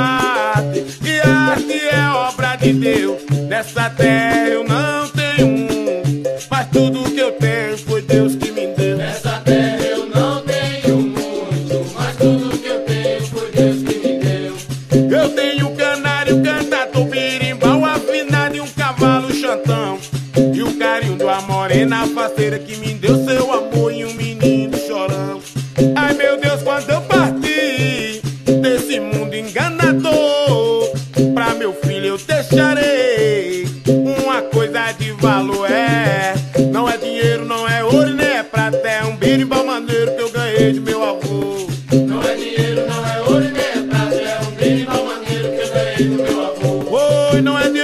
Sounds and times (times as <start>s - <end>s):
Salsa music: 0.0s - 47.8s.